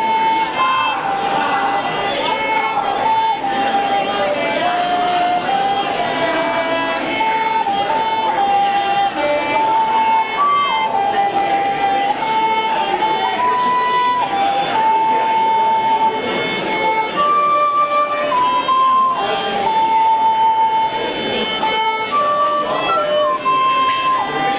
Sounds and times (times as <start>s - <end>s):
Violin, fiddle: 0.0s - 24.5s.